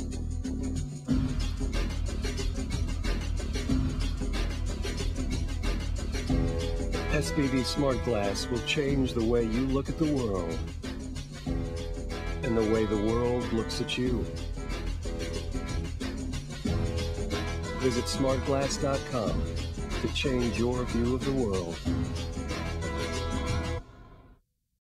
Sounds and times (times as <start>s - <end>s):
Music: 0.0s - 24.4s
Speech: 7.1s - 10.6s, 12.4s - 14.3s, 17.8s - 19.4s, 20.0s - 21.8s.